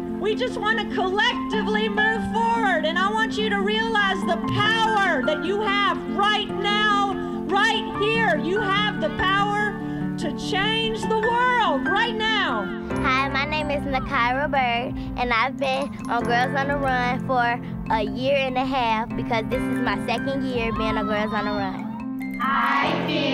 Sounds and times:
Music: 0:00.0 - 0:23.3
Speech: 0:13.1 - 0:21.8.

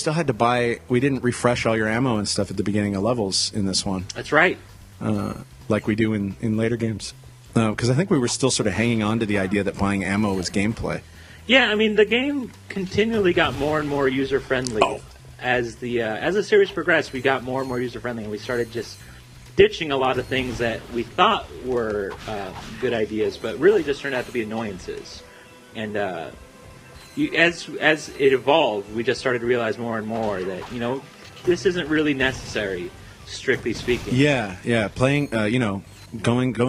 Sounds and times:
Speech: 0:00.0 - 0:19.0, 0:19.6 - 0:25.2, 0:25.8 - 0:26.4, 0:27.2 - 0:36.6.

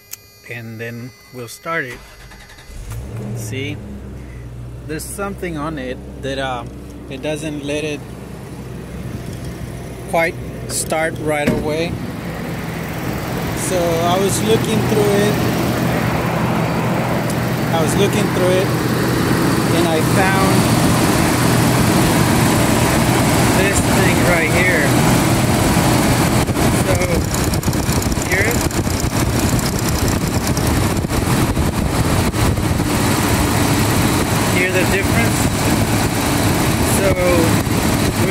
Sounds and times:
Medium engine (mid frequency): 0:00.0 - 0:38.3
Speech: 0:00.5 - 0:02.0, 0:03.4 - 0:03.8, 0:04.9 - 0:08.0, 0:10.1 - 0:12.0, 0:13.6 - 0:15.4, 0:17.7 - 0:18.7, 0:19.7 - 0:20.6, 0:23.6 - 0:25.0, 0:26.8 - 0:27.2, 0:28.2 - 0:28.6, 0:34.5 - 0:35.5, 0:36.8 - 0:37.6
Vehicle: 0:00.5 - 0:38.3
Idling: 0:03.8 - 0:38.3.

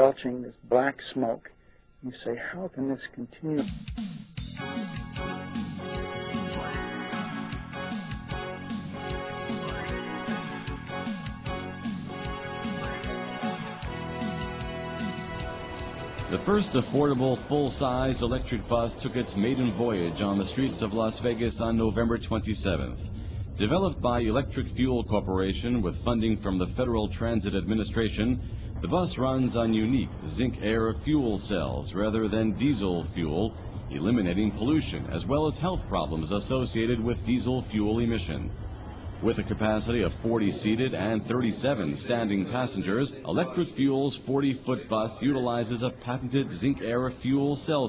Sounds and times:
Speech: 0:00.0 - 0:03.7, 0:16.3 - 0:38.5, 0:39.2 - 0:47.8.

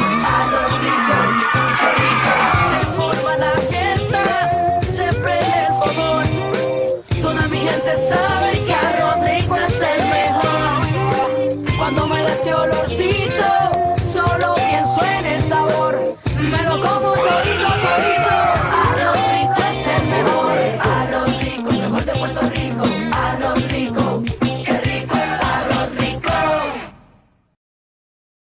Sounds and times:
Music: 0:00.0 - 0:27.4.

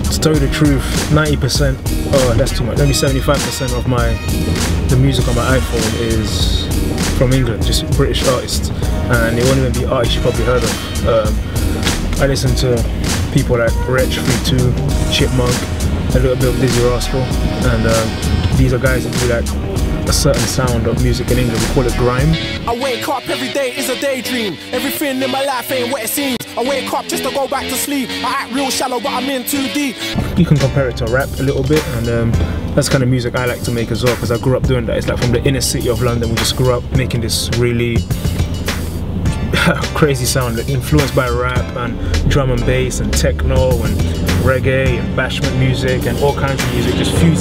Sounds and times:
Speech: 0:00.0 - 0:04.2, 0:04.9 - 0:11.4, 0:12.2 - 0:19.5, 0:20.1 - 0:29.8, 0:30.4 - 0:38.1, 0:39.5 - 0:47.4
Pop music: 0:00.0 - 0:47.4.

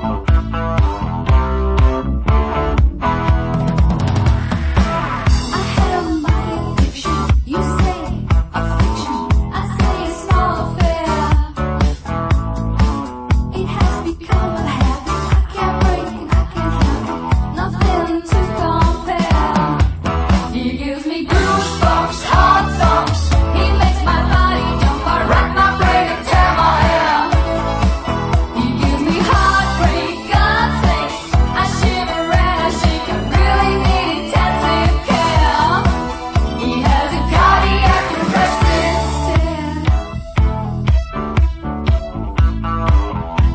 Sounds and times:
Music: 0:00.0 - 0:43.5.

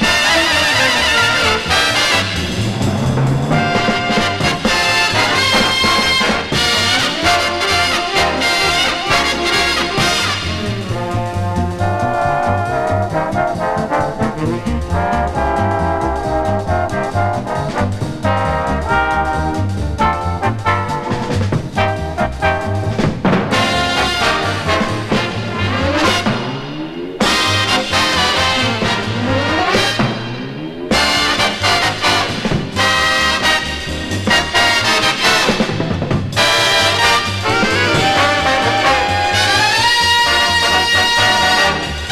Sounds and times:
Orchestra: 0:00.0 - 0:42.1
Trumpet: 0:00.0 - 0:42.1.

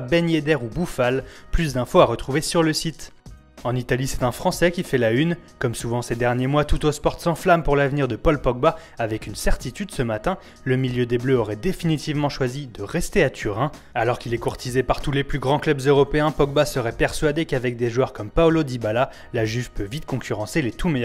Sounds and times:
Music: 0:00.0 - 0:21.0
Speech: 0:00.0 - 0:21.0.

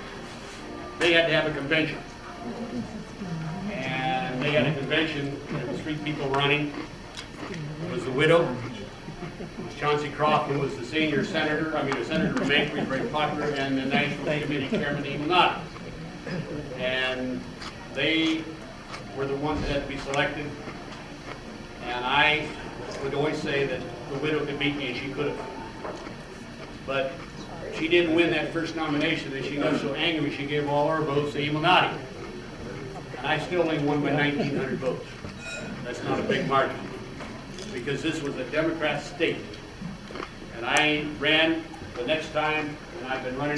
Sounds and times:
Male speech, man speaking: 0:01.0 - 0:02.0, 0:03.8 - 0:06.8, 0:07.9 - 0:08.9, 0:09.7 - 0:15.6, 0:16.8 - 0:17.4, 0:18.0 - 0:20.6, 0:21.8 - 0:25.4, 0:26.9 - 0:32.0, 0:33.2 - 0:35.1, 0:35.9 - 0:36.9, 0:37.6 - 0:39.6, 0:40.5 - 0:43.5
Narration, monologue: 0:33.0 - 0:43.5.

